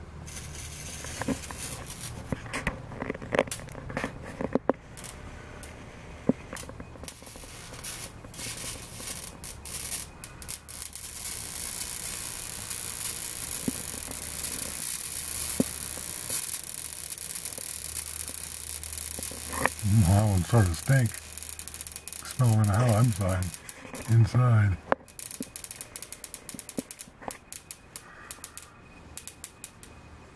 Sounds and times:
Speech: 19.8 - 21.2, 22.2 - 23.5, 24.1 - 24.8.

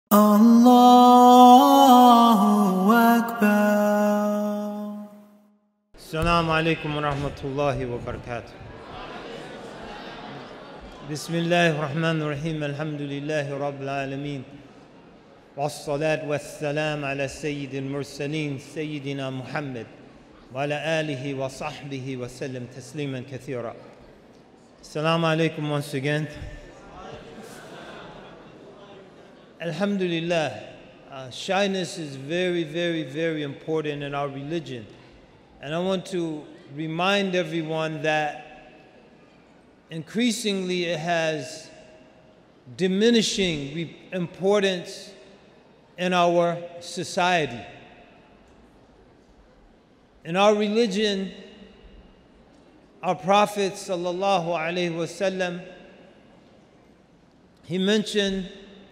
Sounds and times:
Speech: 6.0 - 8.5, 11.1 - 14.5, 15.6 - 19.9, 20.5 - 23.8, 24.8 - 27.8, 29.6 - 34.8, 35.6 - 38.4, 39.9 - 41.8, 42.7 - 45.1, 46.0 - 47.6, 50.3 - 51.4, 53.0 - 55.7, 57.7 - 58.5.

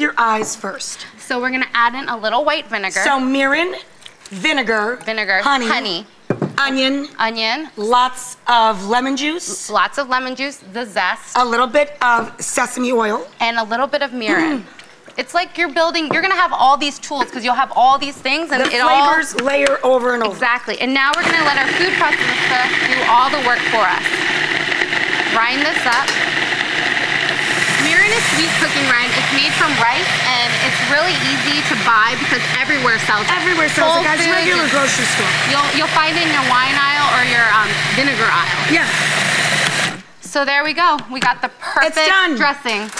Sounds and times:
Speech: 0.0 - 24.2, 27.8 - 39.0.

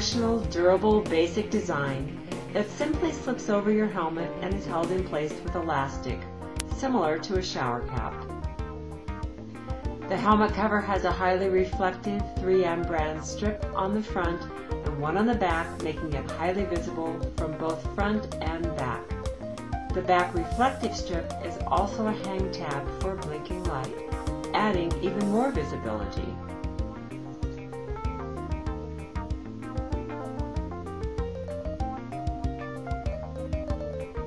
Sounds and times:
Speech: 0.0 - 8.2, 10.1 - 19.1, 19.9 - 26.4
Music: 0.0 - 34.2.

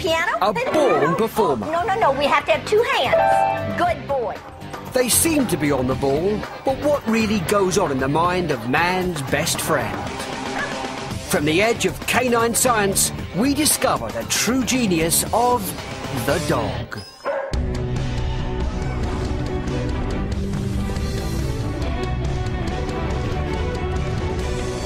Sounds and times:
Music: 0.0 - 24.8
Speech: 3.8 - 10.1, 11.3 - 17.0
Bow-wow: 9.5 - 11.0, 17.2 - 17.6.

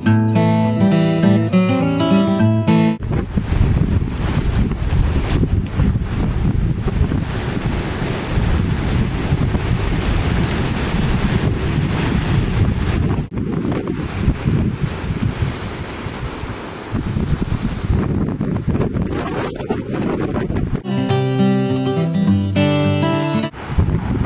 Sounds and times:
Waves, surf: 1.2 - 20.9, 21.9 - 24.2
Wind noise (microphone): 3.0 - 20.9, 23.5 - 24.2.

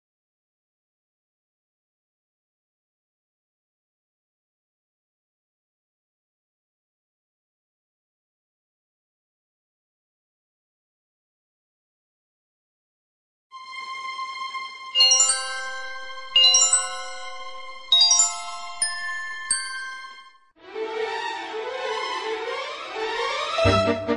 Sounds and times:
Jingle, tinkle: 15.0 - 20.4.

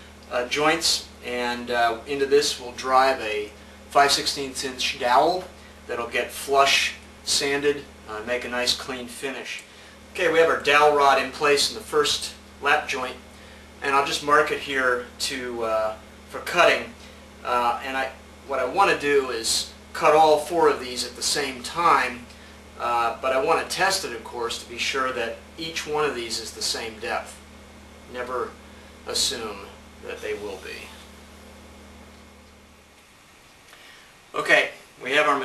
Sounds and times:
Speech: 0.3 - 13.2, 13.8 - 27.4, 28.1 - 31.0, 34.3 - 35.4.

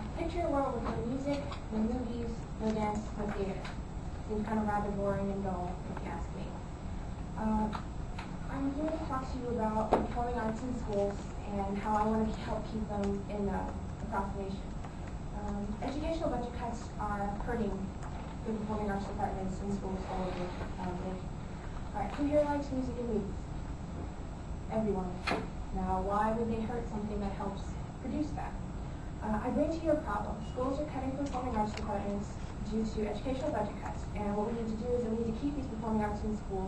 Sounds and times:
Female speech, woman speaking: 0.0 - 6.6, 7.4 - 7.9, 8.5 - 14.7, 15.4 - 21.3, 21.9 - 23.4, 24.7 - 28.6, 29.2 - 36.6
Narration, monologue: 0.0 - 36.6.

